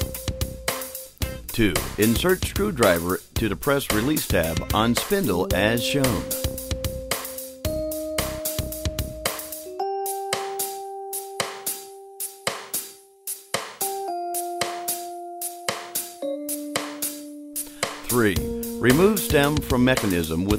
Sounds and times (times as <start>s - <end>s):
Music: 0.0s - 20.5s
Speech: 1.5s - 6.4s, 18.0s - 20.5s.